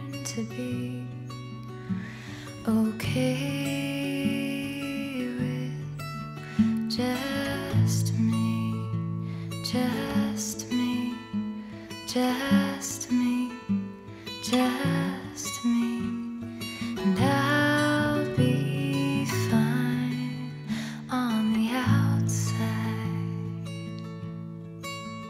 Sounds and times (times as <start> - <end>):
Music: 0.0 - 25.3.